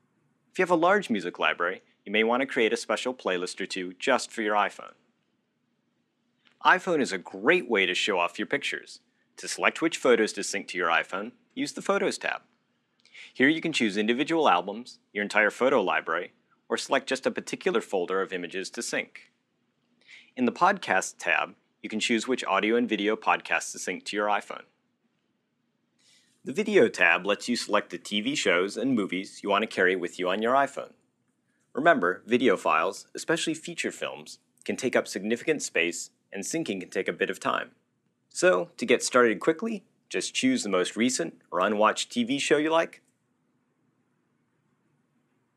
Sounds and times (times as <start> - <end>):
Speech: 0.6 - 4.9, 6.6 - 12.4, 13.2 - 19.2, 20.2 - 24.6, 26.5 - 30.9, 31.8 - 37.7, 38.3 - 43.0.